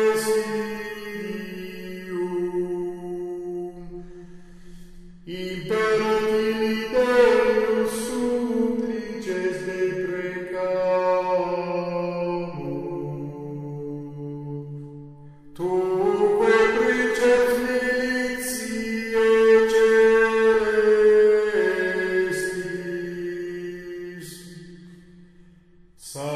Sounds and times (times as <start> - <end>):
Mantra: 0.0 - 4.0, 5.3 - 14.9, 15.6 - 24.8, 26.0 - 26.3.